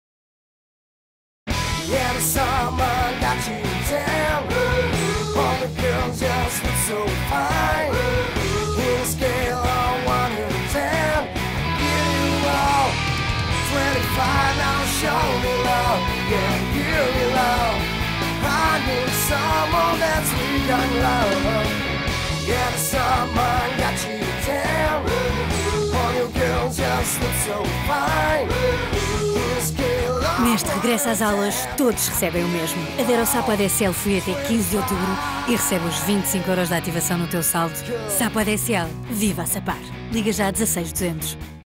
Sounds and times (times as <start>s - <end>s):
Music: 1.5s - 41.6s
Speech: 30.1s - 41.4s.